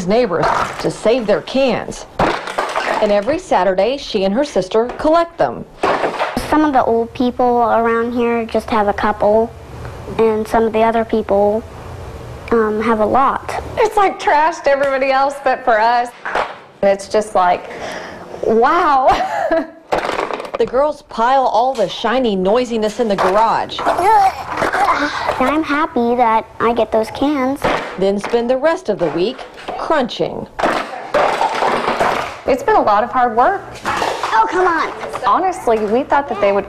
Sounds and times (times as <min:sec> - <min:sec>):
Inside, small room: 0:00.0 - 0:36.6.